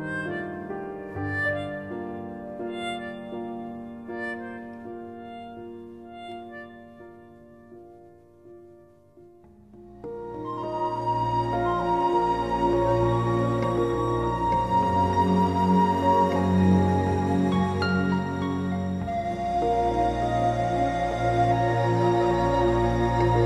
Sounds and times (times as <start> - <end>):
New-age music: 0.0 - 23.4.